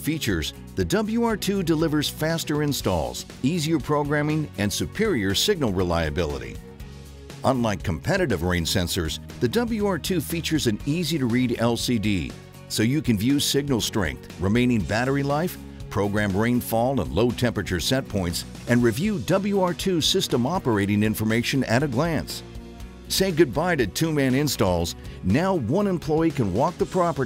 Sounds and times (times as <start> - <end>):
Speech: 0.0 - 6.6, 7.4 - 22.4, 23.1 - 27.2
Music: 0.0 - 27.2.